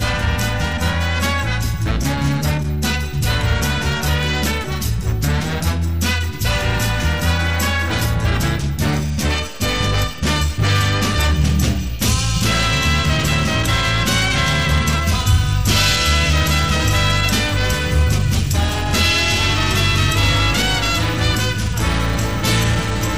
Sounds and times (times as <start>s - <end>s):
Swing music: 0.0s - 23.1s.